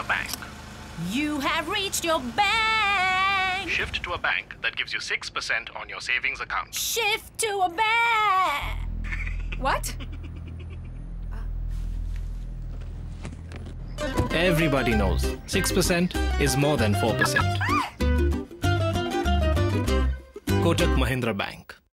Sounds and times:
Music: 13.8 - 21.4
Speech: 20.6 - 21.8.

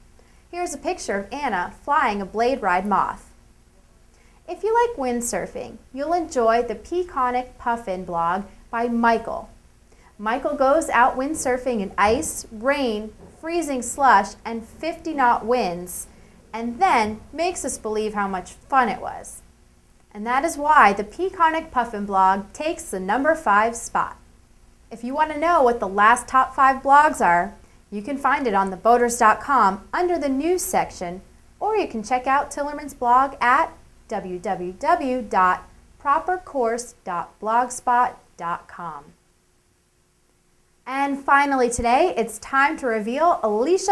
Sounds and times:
Speech: 0.6 - 3.2, 4.5 - 9.5, 10.2 - 19.4, 20.1 - 24.2, 24.9 - 39.2, 40.9 - 43.9.

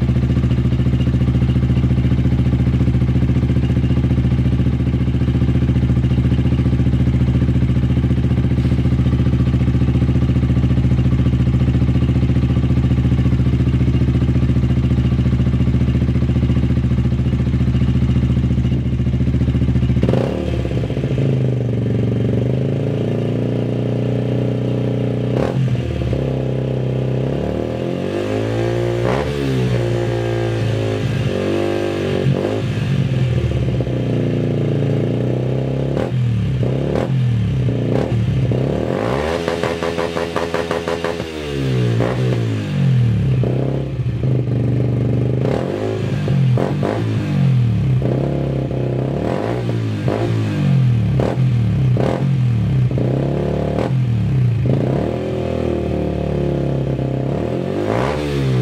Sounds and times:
Motorcycle: 0.0 - 58.6.

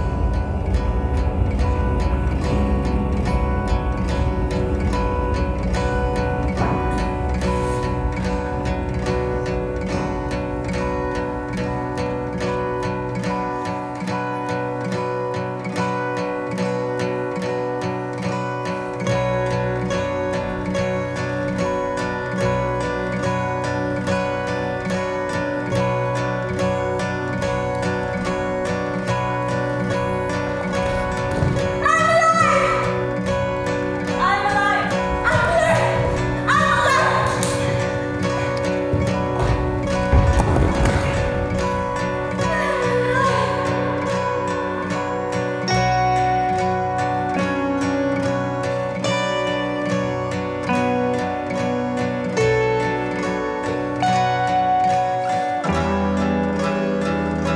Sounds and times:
Music: 0.0 - 57.5.

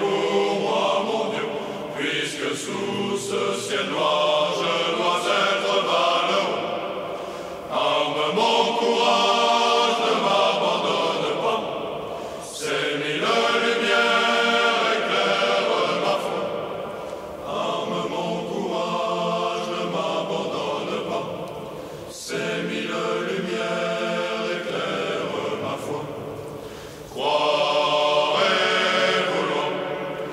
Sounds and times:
Mantra: 0.0 - 30.3.

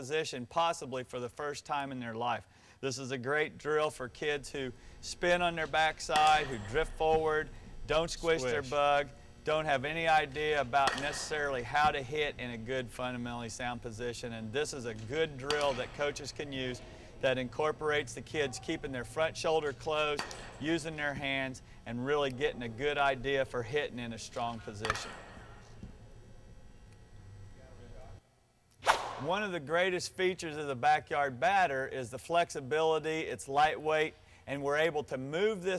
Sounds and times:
Speech: 0.0 - 25.0, 29.2 - 35.7.

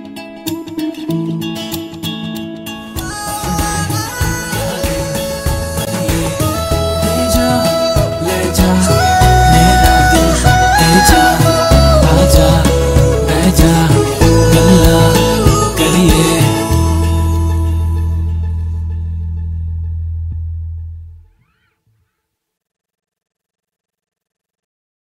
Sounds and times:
Music: 0.0 - 21.4.

